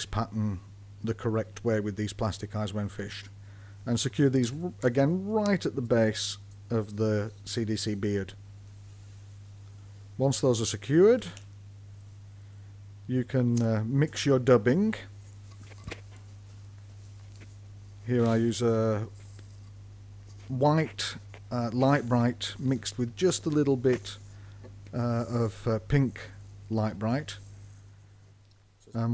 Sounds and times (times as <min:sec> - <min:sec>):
Speech: 0:00.0 - 0:08.4, 0:10.2 - 0:11.5, 0:13.1 - 0:15.2, 0:18.0 - 0:19.1, 0:20.4 - 0:24.2, 0:24.9 - 0:27.5, 0:28.8 - 0:29.1.